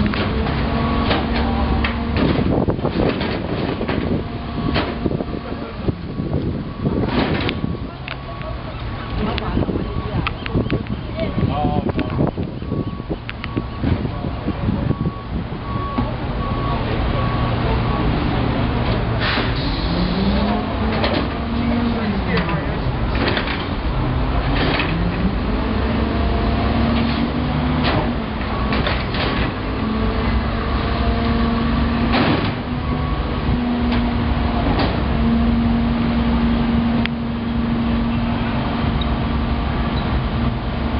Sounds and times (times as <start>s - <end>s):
Speech: 7.8s - 12.3s, 21.5s - 23.0s.